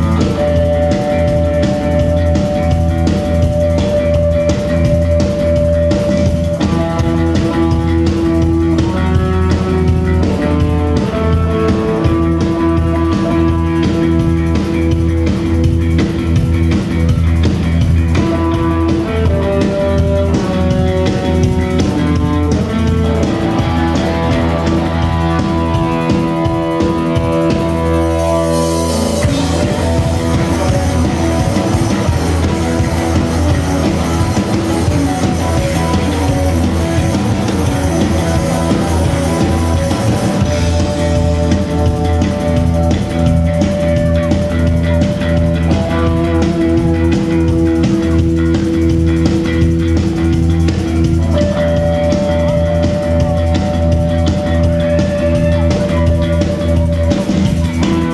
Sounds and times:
Music: 0:00.0 - 0:58.1.

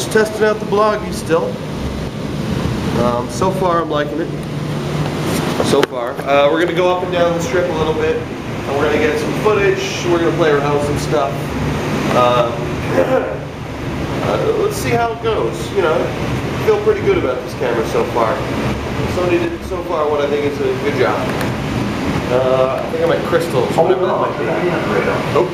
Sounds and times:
Speech: 0:00.0 - 0:01.6, 0:03.0 - 0:04.4, 0:05.6 - 0:11.5, 0:12.1 - 0:13.4, 0:14.2 - 0:18.5, 0:19.1 - 0:21.4, 0:22.3 - 0:25.5.

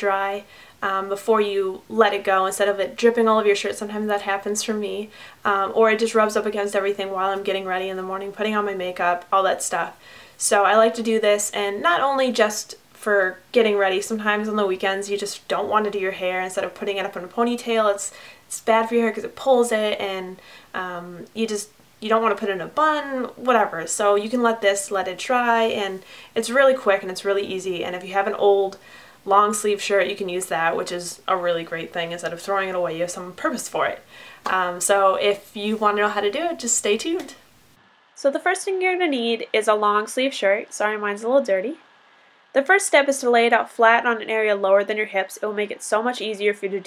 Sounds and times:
Speech: 0:00.0 - 0:37.4, 0:38.2 - 0:41.8, 0:42.6 - 0:46.8.

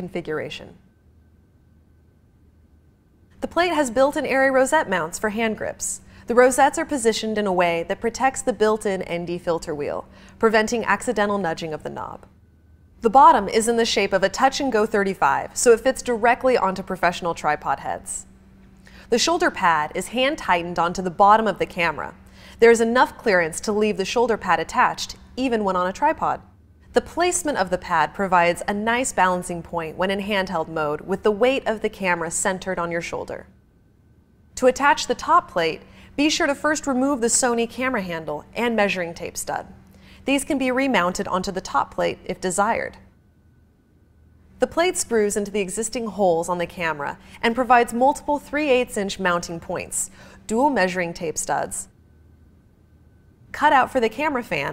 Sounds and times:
Speech: 0:00.0 - 0:00.8, 0:03.4 - 0:12.3, 0:13.0 - 0:18.3, 0:19.1 - 0:33.5, 0:34.6 - 0:43.0, 0:44.6 - 0:51.9, 0:53.6 - 0:54.7.

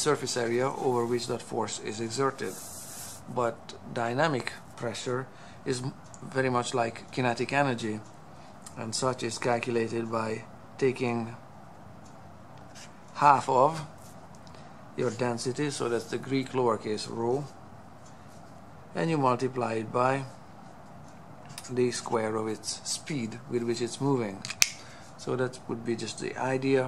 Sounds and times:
Speech: 0:00.0 - 0:02.6, 0:03.3 - 0:08.0, 0:08.7 - 0:11.4, 0:13.2 - 0:13.9, 0:15.0 - 0:17.6, 0:18.9 - 0:20.3, 0:21.6 - 0:24.5, 0:25.2 - 0:26.8.

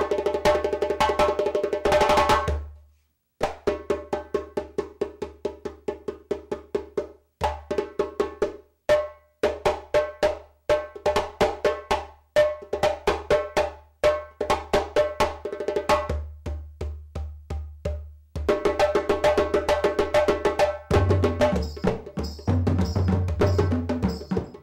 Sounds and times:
Wood block: 0:12.4 - 0:24.6.

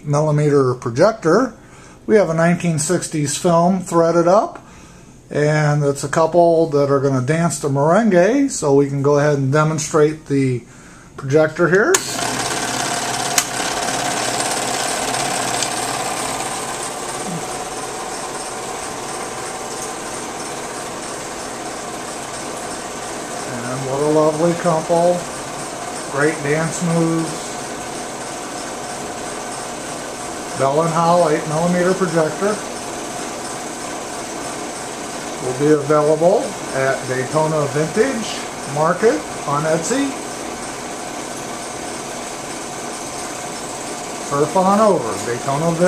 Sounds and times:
Speech: 0:00.0 - 0:04.6, 0:05.3 - 0:12.2, 0:23.5 - 0:25.3, 0:26.1 - 0:27.5, 0:30.6 - 0:32.7, 0:35.4 - 0:40.2, 0:44.3 - 0:45.8.

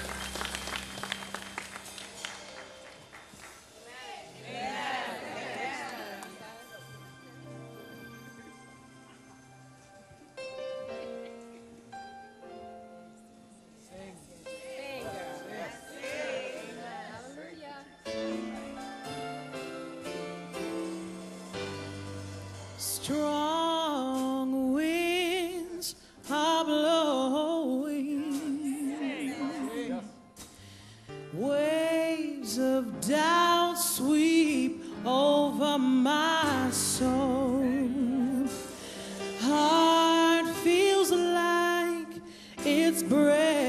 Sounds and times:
Music: 0:00.0 - 0:43.6.

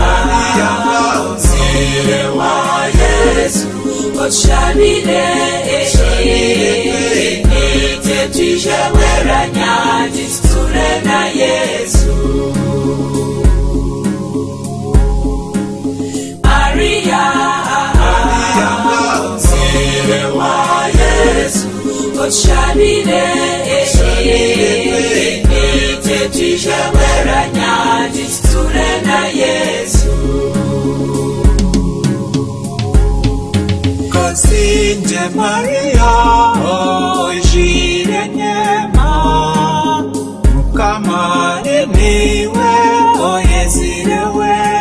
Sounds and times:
Music: 0:00.0 - 0:44.8.

